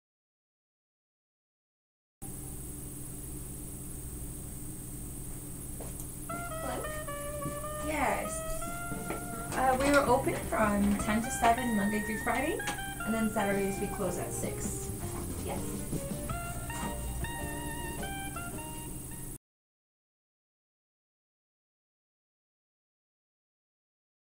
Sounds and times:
Music: 6.3s - 19.4s.

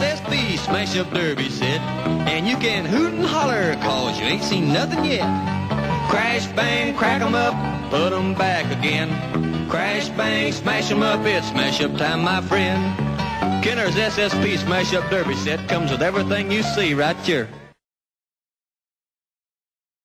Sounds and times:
Music: 0.0s - 17.8s
Speech: 2.3s - 5.3s, 13.7s - 17.5s.

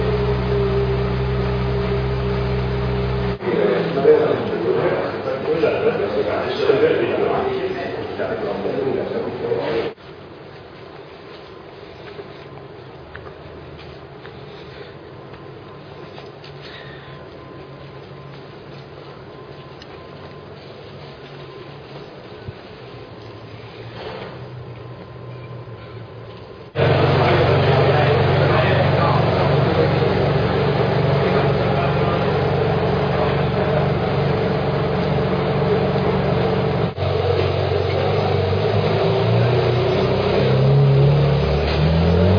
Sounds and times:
Speech: 3.4s - 10.0s, 26.8s - 34.1s.

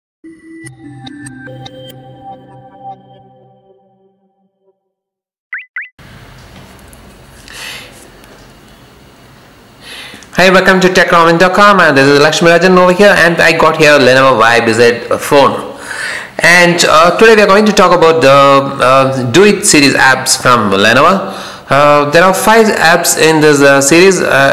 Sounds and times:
Music: 0.2s - 5.1s.

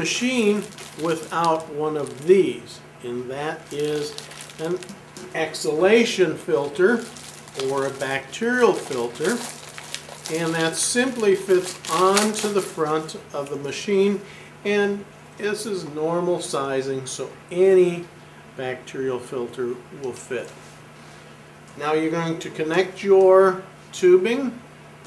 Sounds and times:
Speech: 0.0s - 9.5s, 10.3s - 20.6s, 21.8s - 24.6s.

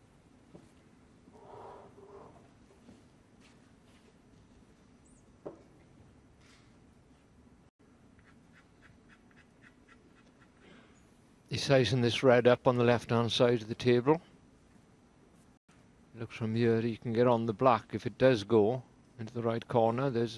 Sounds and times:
Speech: 11.5s - 14.3s, 16.2s - 20.3s.

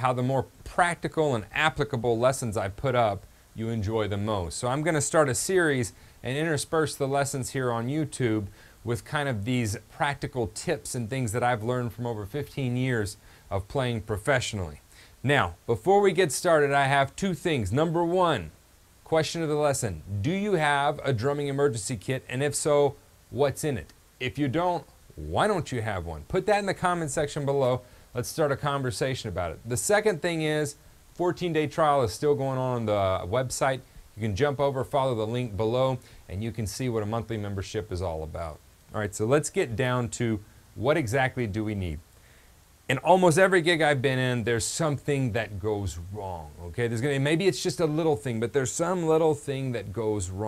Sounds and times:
Speech: 0.0s - 42.1s, 42.9s - 50.4s.

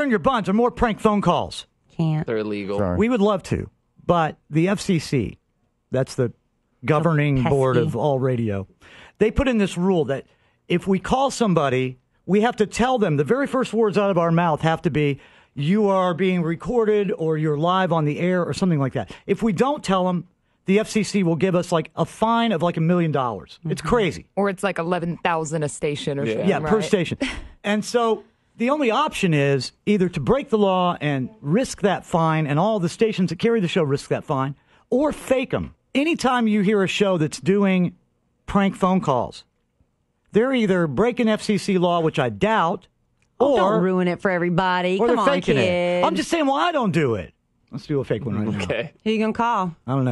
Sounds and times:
Speech: 0.0s - 5.4s, 6.0s - 24.2s, 25.7s - 39.5s, 40.4s - 50.1s.

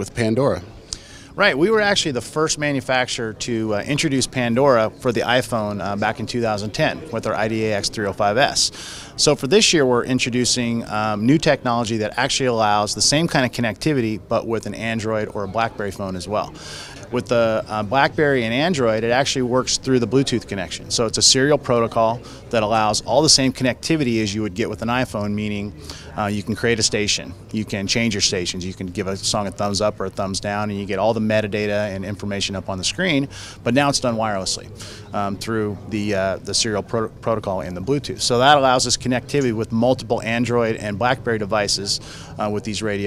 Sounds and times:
Speech: 0.0s - 0.7s, 1.4s - 43.0s.

